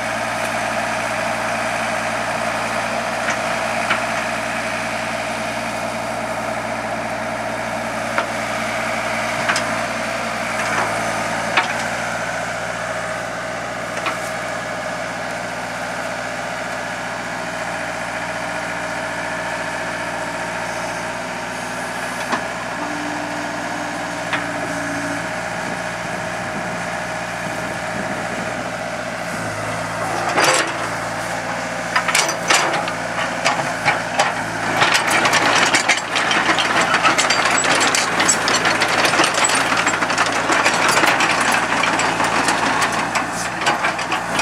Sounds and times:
Idling: 0:00.0 - 0:44.4
Vehicle: 0:00.0 - 0:44.4.

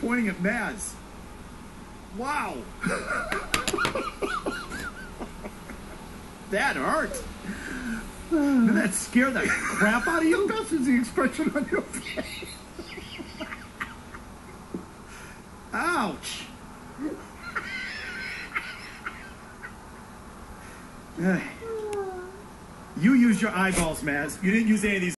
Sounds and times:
Speech: 0:00.0 - 0:01.0, 0:08.4 - 0:11.7, 0:15.7 - 0:16.6, 0:23.0 - 0:25.1.

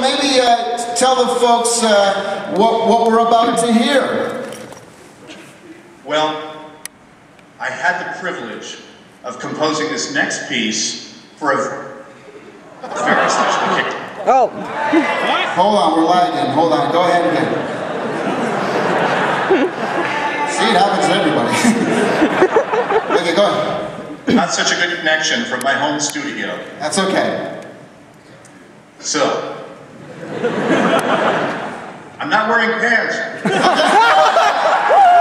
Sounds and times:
Inside, large room or hall: 0:00.0 - 0:35.2.

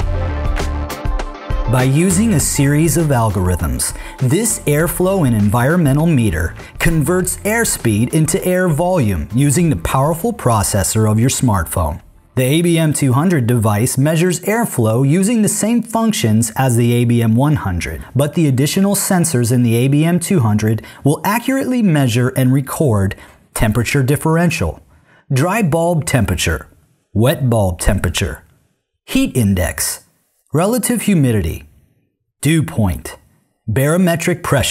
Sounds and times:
Speech: 0:01.7 - 0:28.5, 0:29.1 - 0:31.7, 0:32.4 - 0:34.7.

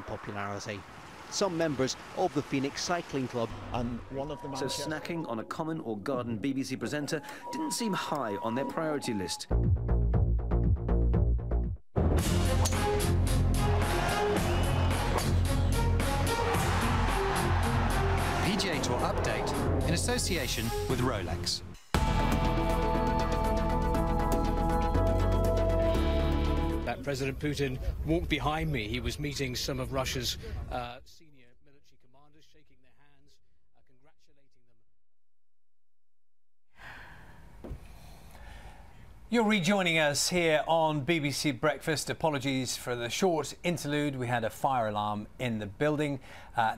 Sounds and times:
Speech: 0:00.0 - 0:09.5, 0:18.4 - 0:21.7, 0:26.9 - 0:34.7, 0:39.3 - 0:46.7
Music: 0:07.1 - 0:27.0.

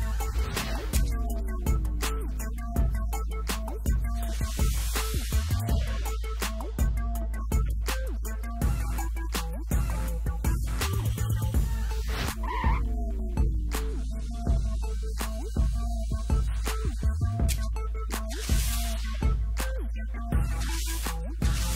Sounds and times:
Music: 0:00.0 - 0:21.7.

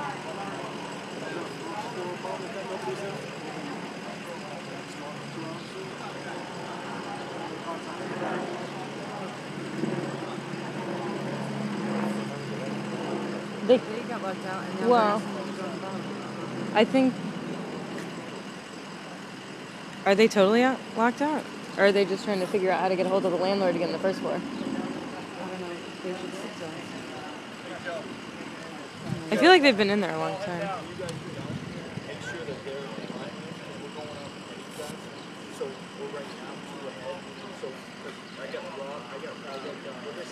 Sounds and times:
Speech: 0:00.0 - 0:13.1, 0:20.1 - 0:40.3.

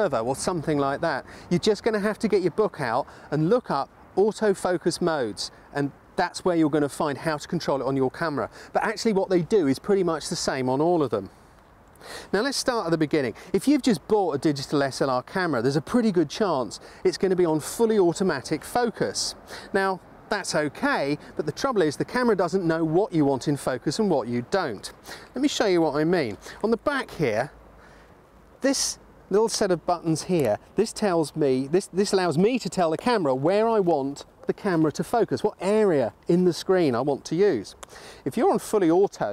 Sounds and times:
Speech: 0:00.0 - 0:11.3, 0:12.3 - 0:27.6, 0:28.6 - 0:39.3.

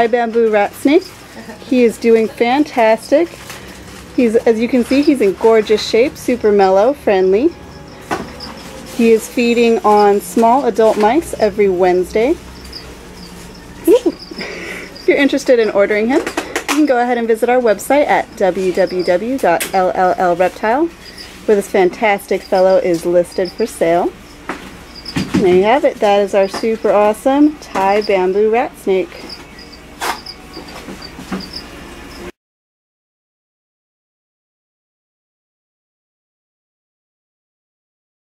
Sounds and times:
Speech: 0:00.0 - 0:03.4, 0:04.2 - 0:07.5, 0:09.0 - 0:12.4, 0:13.8 - 0:14.2, 0:15.0 - 0:20.9, 0:21.5 - 0:24.1, 0:25.4 - 0:29.2
Animal: 0:29.1 - 0:32.3.

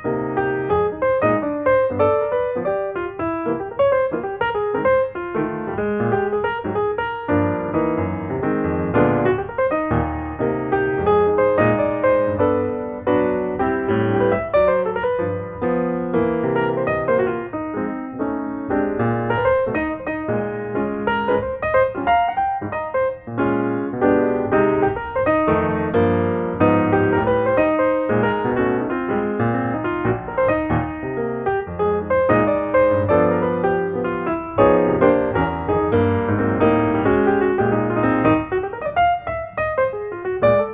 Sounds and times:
Music: 0:00.0 - 0:40.7.

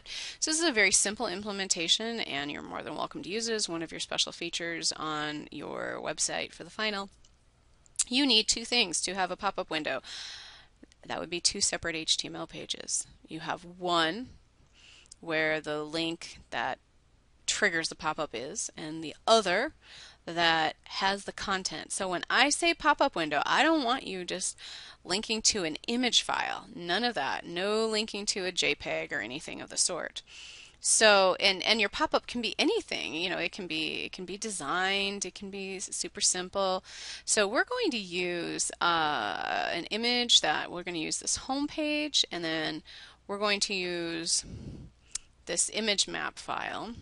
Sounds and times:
Speech: 0:00.0 - 0:07.1, 0:08.0 - 0:10.0, 0:11.0 - 0:14.3, 0:15.2 - 0:16.8, 0:17.5 - 0:30.2, 0:30.8 - 0:44.5, 0:45.5 - 0:47.0.

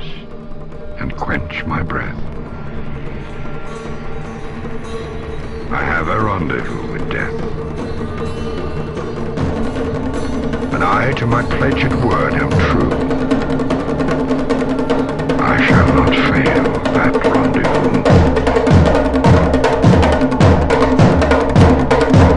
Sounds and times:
Music: 0:00.0 - 0:22.3
Speech: 0:01.0 - 0:02.3, 0:05.7 - 0:07.4, 0:10.8 - 0:13.0, 0:15.4 - 0:18.2.

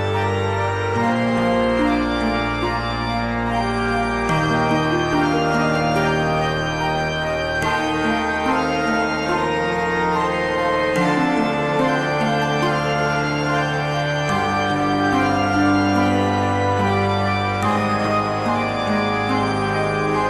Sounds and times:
Theme music: 0:00.0 - 0:20.2.

